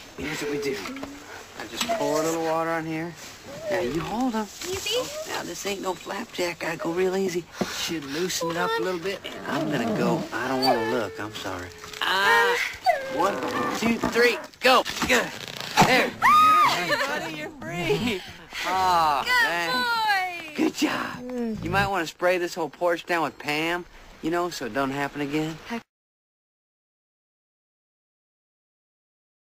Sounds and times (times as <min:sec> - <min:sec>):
Outside, urban or manmade: 0:00.0 - 0:25.9.